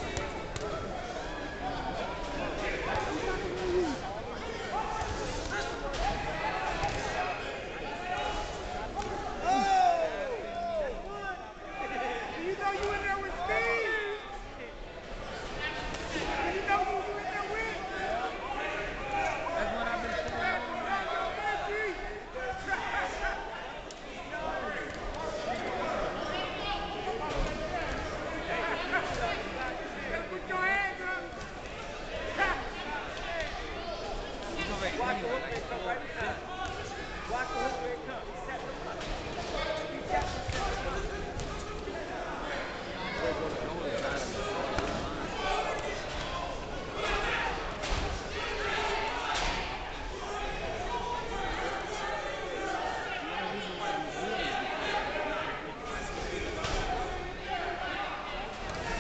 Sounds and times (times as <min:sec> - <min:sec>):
Inside, large room or hall: 0:00.0 - 0:59.0
Speech: 0:00.0 - 0:59.0.